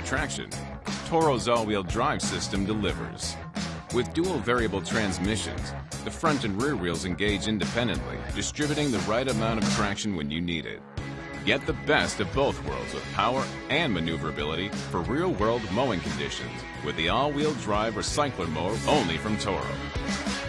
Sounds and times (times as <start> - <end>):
Speech: 0.0 - 10.8, 11.4 - 19.8
Music: 0.0 - 20.4.